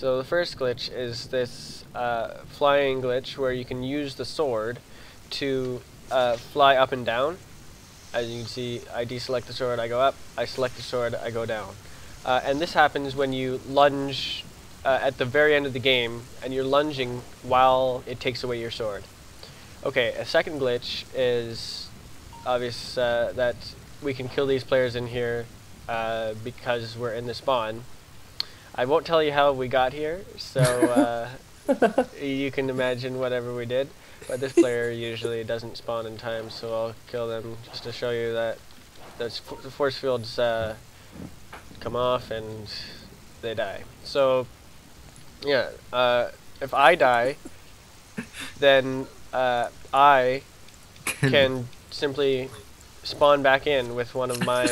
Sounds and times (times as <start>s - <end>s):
Speech: 0.0s - 7.4s, 8.2s - 19.1s, 19.8s - 21.9s, 22.5s - 27.9s, 28.8s - 38.6s, 39.2s - 40.8s, 41.8s - 44.5s, 45.4s - 47.4s, 48.2s - 50.4s, 51.1s - 54.7s.